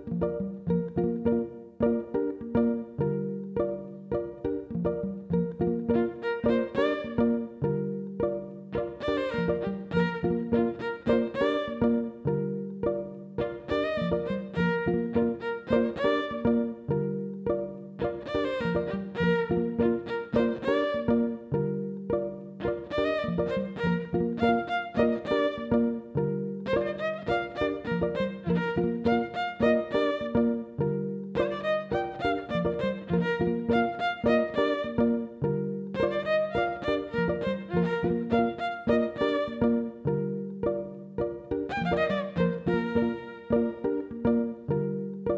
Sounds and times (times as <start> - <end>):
Violin, fiddle: 0.0 - 45.3.